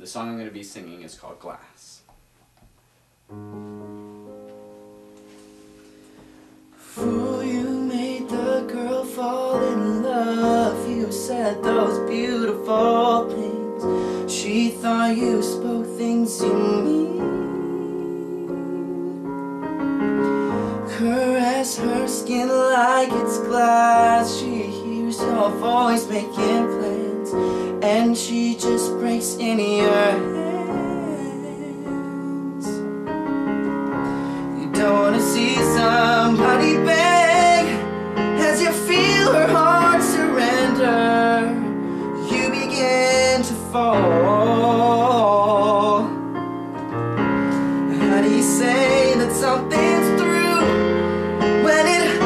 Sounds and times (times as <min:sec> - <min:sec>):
Music: 0:02.8 - 0:52.2.